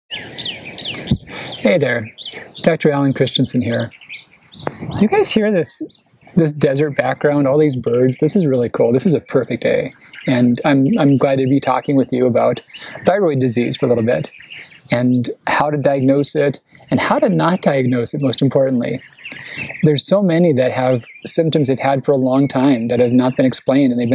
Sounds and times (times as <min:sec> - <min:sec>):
Chirp, tweet: 0:00.1 - 0:24.1
Speech: 0:01.6 - 0:03.9, 0:04.6 - 0:14.3, 0:14.9 - 0:24.1.